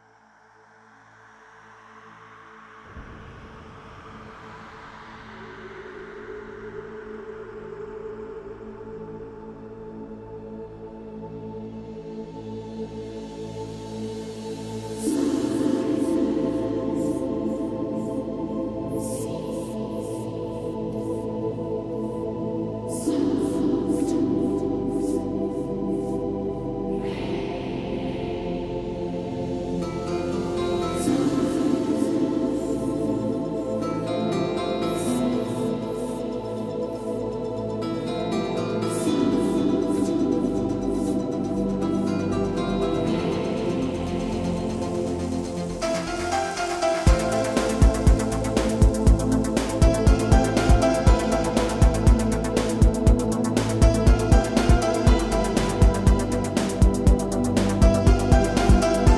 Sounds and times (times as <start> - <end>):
Music: 0.0 - 59.1.